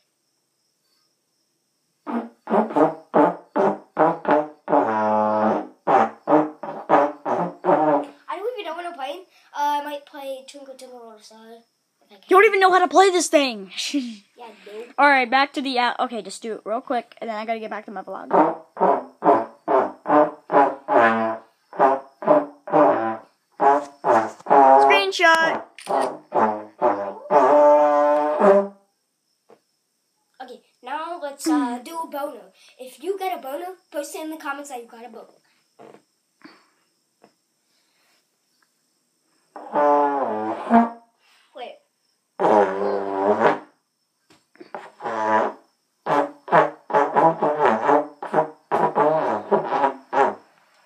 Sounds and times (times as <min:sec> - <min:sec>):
Trombone: 0:02.1 - 0:08.2, 0:18.3 - 0:28.8, 0:39.6 - 0:41.0, 0:42.4 - 0:43.7, 0:44.9 - 0:50.4
Child speech, kid speaking: 0:08.3 - 0:18.3, 0:24.8 - 0:25.7, 0:30.4 - 0:35.4, 0:41.5 - 0:41.9.